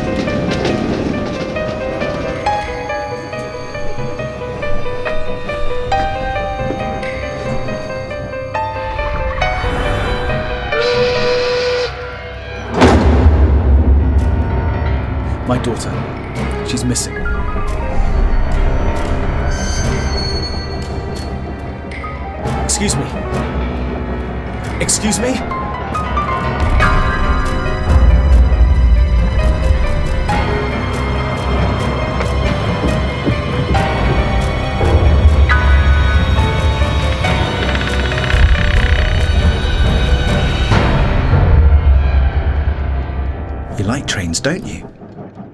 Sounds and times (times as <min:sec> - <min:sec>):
Music: 0:00.0 - 0:45.5.